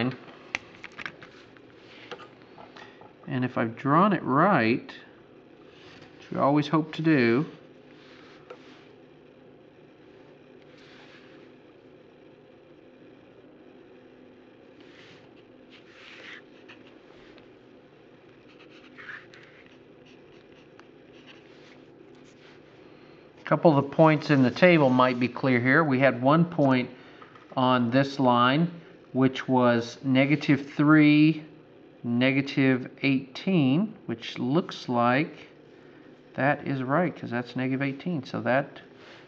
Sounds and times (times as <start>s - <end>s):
Speech: 0.0s - 0.2s, 3.3s - 5.1s, 6.3s - 7.6s, 23.4s - 27.0s, 27.6s - 35.6s, 36.4s - 38.9s.